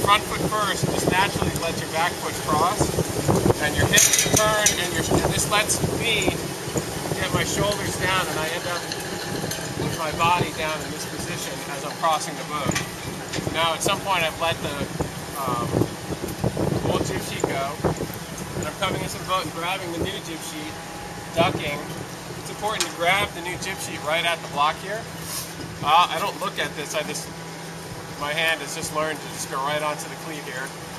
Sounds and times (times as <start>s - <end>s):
Speech: 0.0s - 2.9s, 3.6s - 6.4s, 7.1s - 8.9s, 9.8s - 12.8s, 13.5s - 15.8s, 16.9s - 17.8s, 18.6s - 20.8s, 21.4s - 21.9s, 22.5s - 25.0s, 25.8s - 27.3s, 28.2s - 30.7s
Outside, urban or manmade: 0.0s - 30.9s.